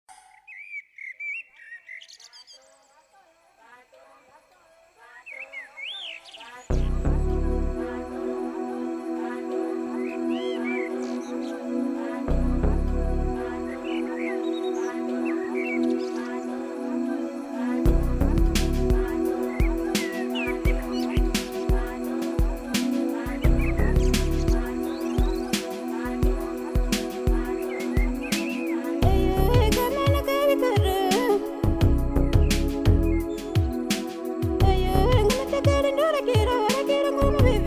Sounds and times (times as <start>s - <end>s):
Chirp, tweet: 0.1s - 3.2s, 5.0s - 7.0s, 10.0s - 11.7s, 13.7s - 16.4s, 23.4s - 25.6s, 32.3s - 33.4s.